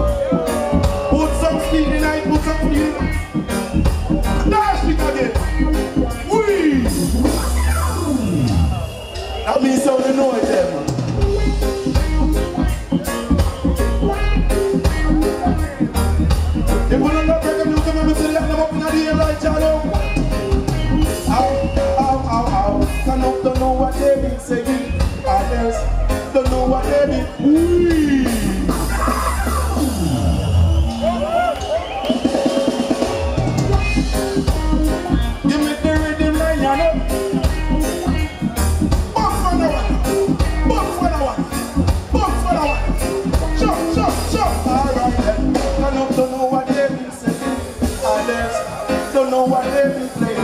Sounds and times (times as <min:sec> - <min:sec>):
Traditional music: 0:00.0 - 0:50.4.